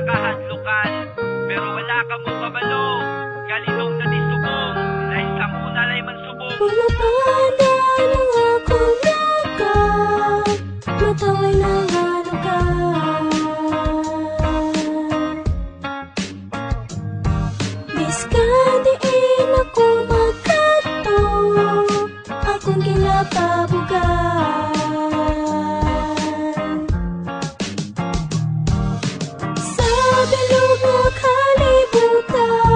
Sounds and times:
Music: 0:00.0 - 0:32.7.

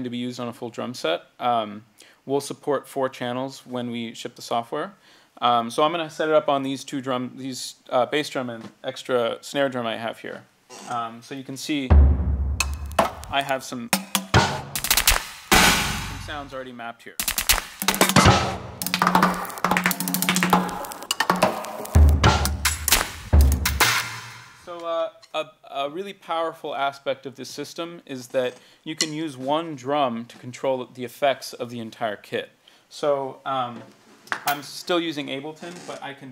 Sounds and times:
Speech: 0:00.0 - 0:11.9, 0:13.3 - 0:13.9, 0:16.2 - 0:17.2, 0:24.7 - 0:36.3
Percussion: 0:11.9 - 0:16.5, 0:17.2 - 0:24.7.

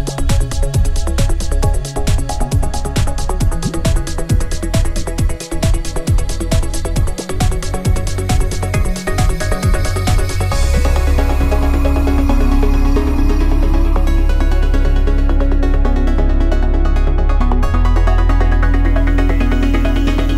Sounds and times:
Music: 0:00.0 - 0:20.3.

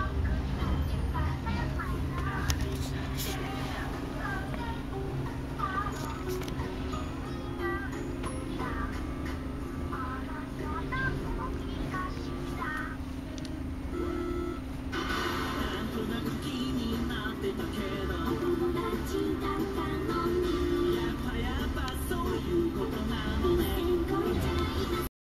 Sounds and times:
Music: 0:00.0 - 0:25.1.

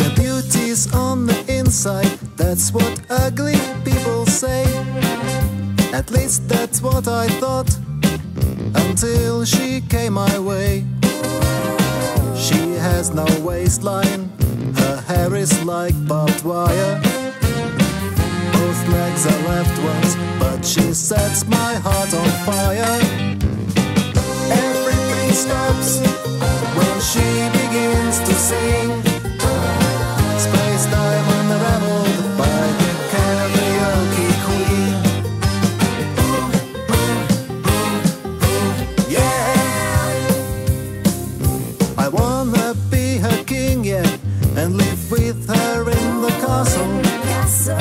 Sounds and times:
Blues: 0:00.0 - 0:47.8
Rhythm and blues: 0:00.0 - 0:47.8.

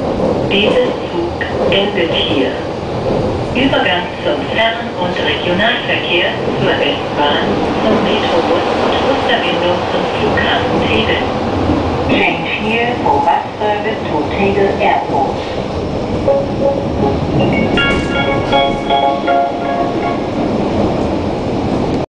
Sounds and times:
Speech: 0:00.5 - 0:02.7, 0:03.6 - 0:11.3, 0:12.1 - 0:15.4
Music: 0:16.3 - 0:20.4.

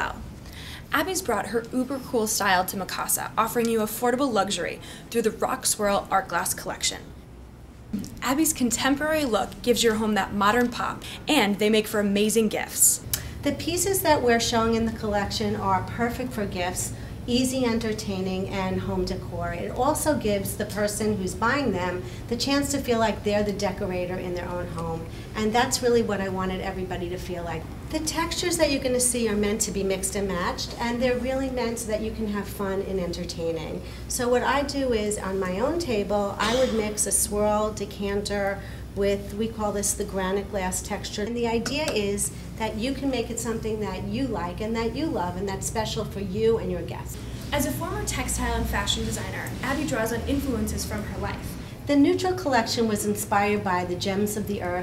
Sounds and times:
Speech: 0:00.0 - 0:00.2, 0:00.9 - 0:07.1, 0:08.0 - 0:54.8.

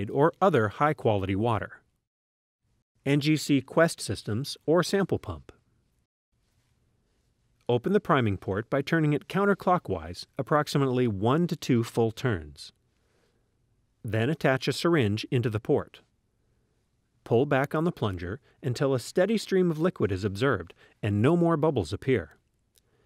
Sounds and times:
Speech: 0:00.0 - 0:01.8, 0:03.0 - 0:05.6, 0:07.7 - 0:12.8, 0:14.1 - 0:16.0, 0:17.3 - 0:22.4.

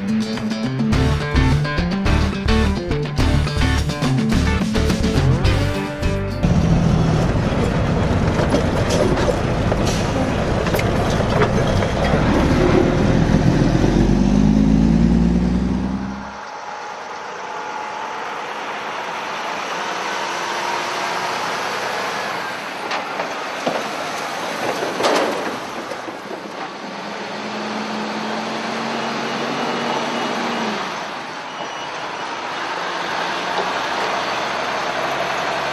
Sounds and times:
Music: 0:00.0 - 0:07.2
Outside, rural or natural: 0:00.0 - 0:35.7
Truck: 0:00.0 - 0:35.7.

